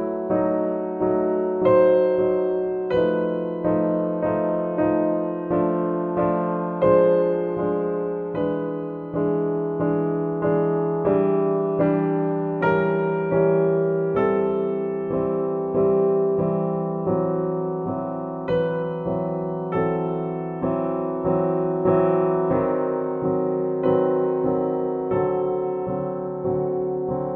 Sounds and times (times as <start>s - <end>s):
Music: 0.0s - 27.3s.